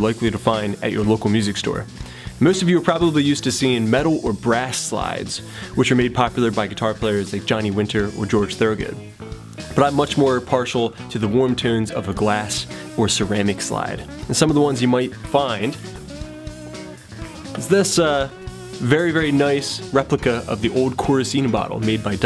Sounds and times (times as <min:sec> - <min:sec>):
Speech: 0:00.0 - 0:09.1, 0:09.7 - 0:15.8, 0:17.6 - 0:22.2
Music: 0:00.0 - 0:22.2.